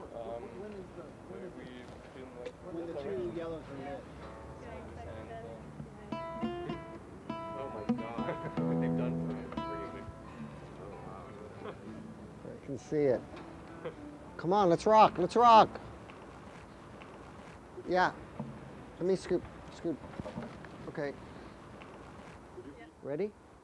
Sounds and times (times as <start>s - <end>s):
Music: 4.2s - 16.0s.